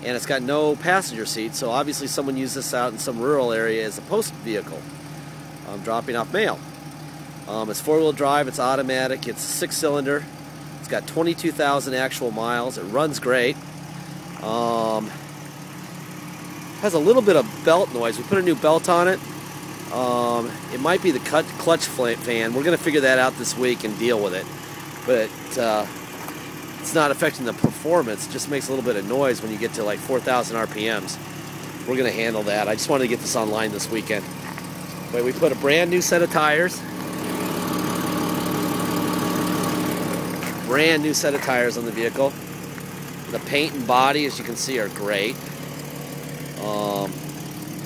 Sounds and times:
Speech: 0:00.0 - 0:04.8, 0:05.7 - 0:06.6, 0:07.5 - 0:13.6, 0:14.4 - 0:15.2, 0:16.8 - 0:19.2, 0:19.9 - 0:24.5, 0:25.1 - 0:25.9, 0:26.8 - 0:31.2, 0:31.8 - 0:34.3, 0:35.1 - 0:36.9, 0:40.7 - 0:42.4, 0:43.3 - 0:45.4, 0:46.6 - 0:47.2
Car: 0:00.0 - 0:47.8.

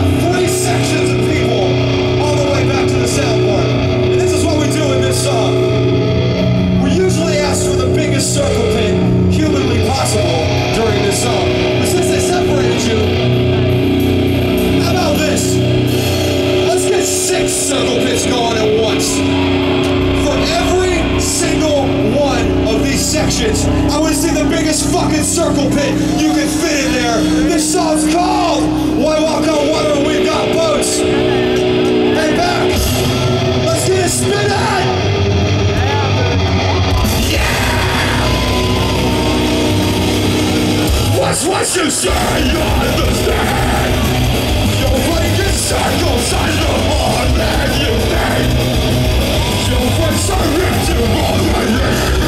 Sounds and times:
Music: 0:00.0 - 0:52.2
Speech: 0:00.2 - 0:05.7, 0:06.8 - 0:13.2, 0:14.8 - 0:15.6, 0:16.6 - 0:19.2, 0:20.2 - 0:32.8, 0:33.6 - 0:35.0, 0:41.2 - 0:44.0, 0:44.8 - 0:48.6, 0:49.6 - 0:52.2.

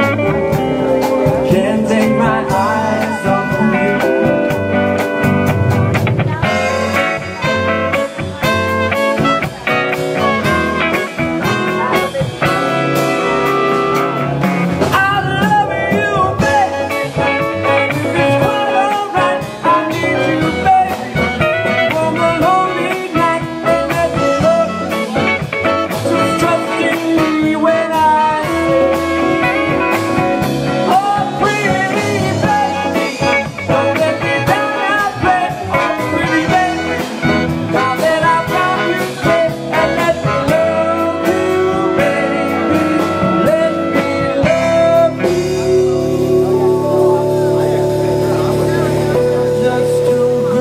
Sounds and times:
Orchestra: 0:00.0 - 0:32.2, 0:35.2 - 0:50.6
Rhythm and blues: 0:00.0 - 0:50.6.

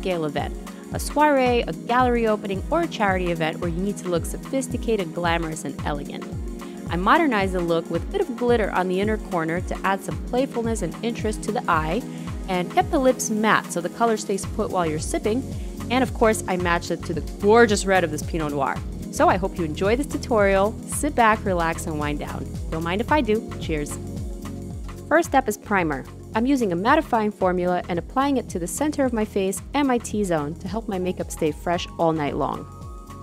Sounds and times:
Speech: 0:00.0 - 0:06.2, 0:06.9 - 0:24.0, 0:25.1 - 0:32.7
Music: 0:00.0 - 0:33.2.

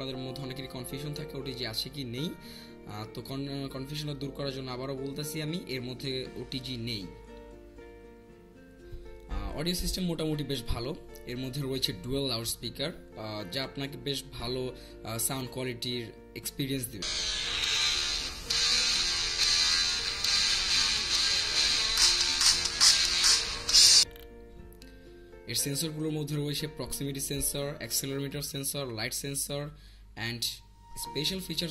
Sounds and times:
Speech: 0:00.0 - 0:07.2, 0:09.3 - 0:17.0, 0:25.5 - 0:31.7
Music: 0:00.0 - 0:31.7.

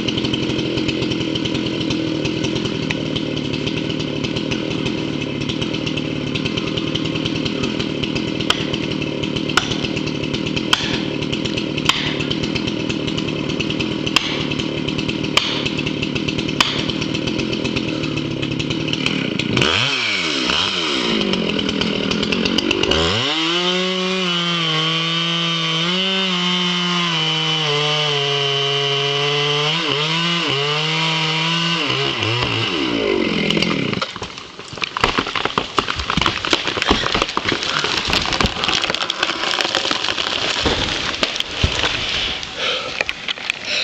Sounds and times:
Crackle: 0:33.9 - 0:43.8.

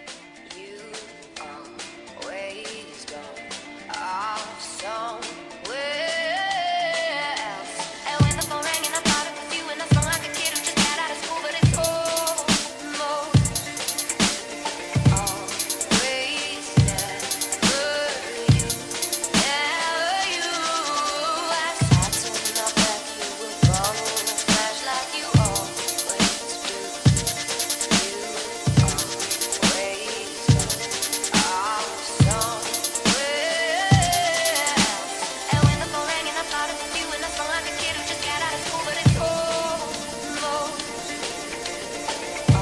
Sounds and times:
Dubstep: 0:02.6 - 0:42.6.

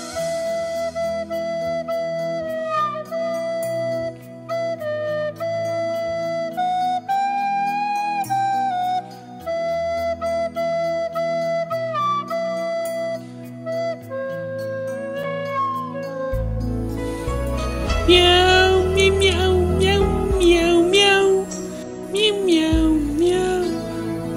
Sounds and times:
Music: 0:00.0 - 0:24.3.

